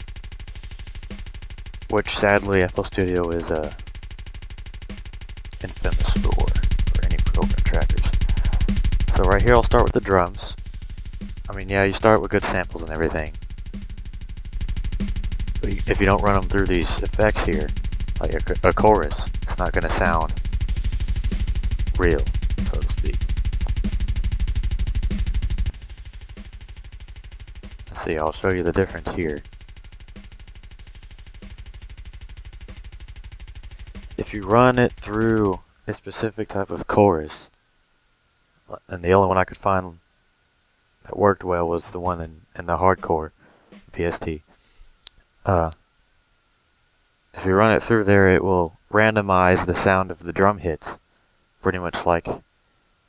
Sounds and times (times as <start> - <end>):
Music: 0.0 - 35.9, 43.7 - 44.0
Speech: 1.9 - 3.8, 5.6 - 10.6, 11.5 - 13.3, 15.6 - 20.4, 22.0 - 23.2, 27.9 - 29.4, 34.2 - 37.5, 38.7 - 40.0, 41.0 - 44.4, 45.5 - 45.8, 47.4 - 51.0, 51.6 - 52.4.